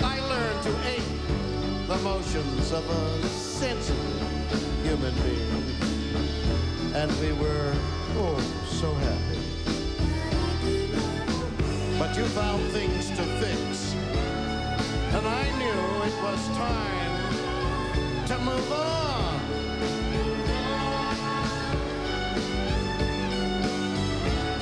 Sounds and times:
Music: 0:00.0 - 0:24.6
Speech: 0:07.0 - 0:09.5, 0:11.9 - 0:14.0, 0:15.1 - 0:17.3.

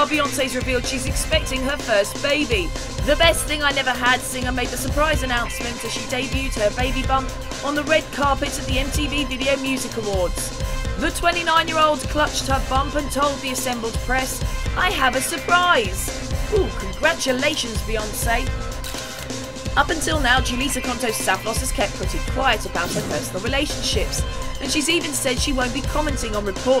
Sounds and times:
Speech: 0:00.0 - 0:18.5, 0:19.8 - 0:26.8
Music: 0:00.0 - 0:26.8.

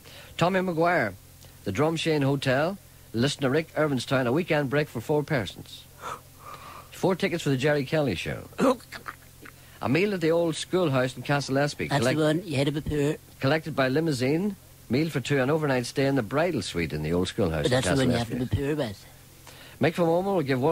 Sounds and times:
Speech: 0:00.4 - 0:05.9, 0:07.0 - 0:09.0, 0:09.8 - 0:19.1, 0:19.8 - 0:20.7.

